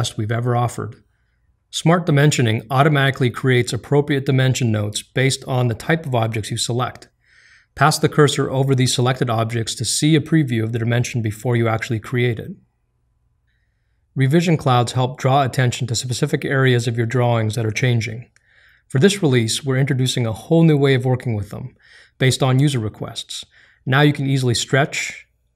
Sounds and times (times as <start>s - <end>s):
Speech: 0.0s - 1.0s, 1.7s - 7.1s, 7.8s - 12.6s, 14.2s - 25.3s.